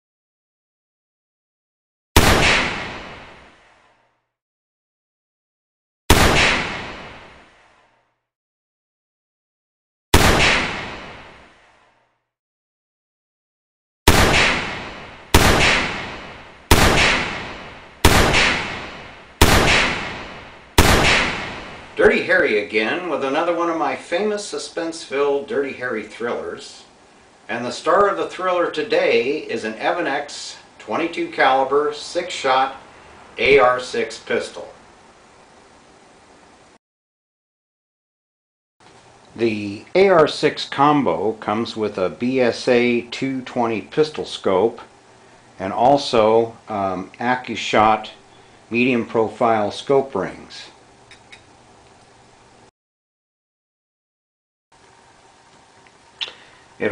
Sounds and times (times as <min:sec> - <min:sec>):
Gunshot, gunfire: 0:02.2 - 0:03.6, 0:06.1 - 0:07.5, 0:10.2 - 0:11.6, 0:14.1 - 0:21.9.